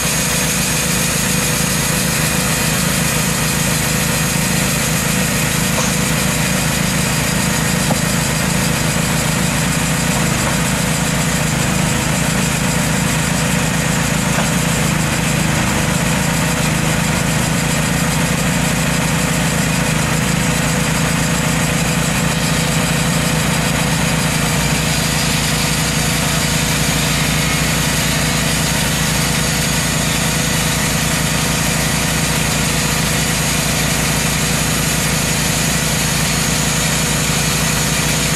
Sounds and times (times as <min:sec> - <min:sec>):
Heavy engine (low frequency): 0:00.0 - 0:38.3.